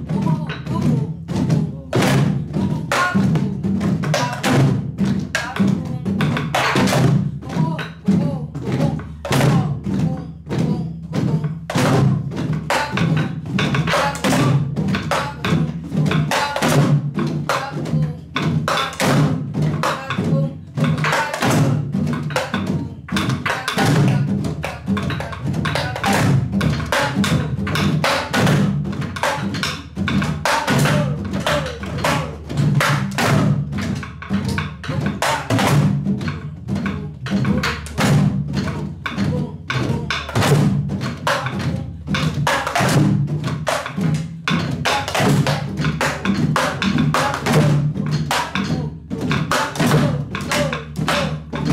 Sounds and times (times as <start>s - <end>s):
Drum: 0.0s - 51.7s
Wood block: 0.0s - 51.7s.